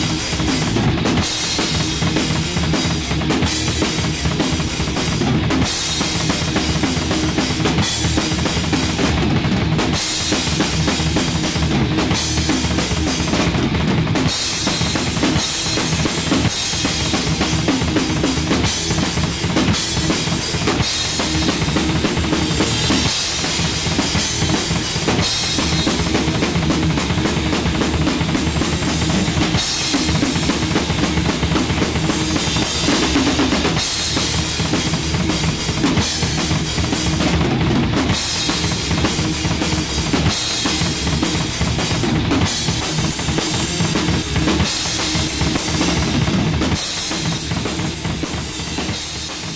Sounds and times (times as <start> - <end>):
Drum: 0.0 - 49.5
Drum kit: 0.0 - 49.5.